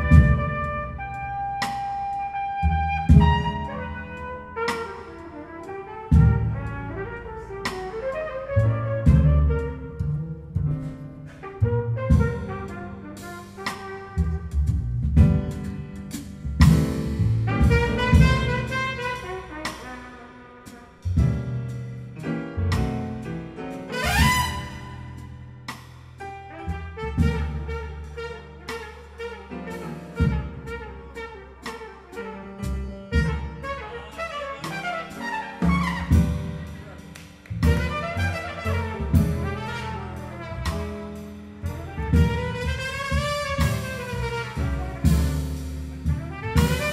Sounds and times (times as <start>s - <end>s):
Trumpet: 0.0s - 46.9s.